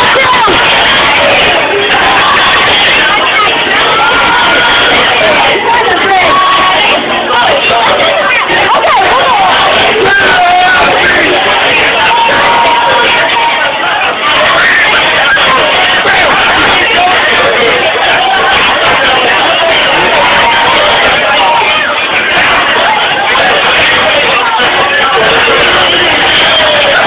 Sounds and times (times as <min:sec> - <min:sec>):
Crowd: 0:00.0 - 0:27.0
Speech: 0:00.0 - 0:27.0.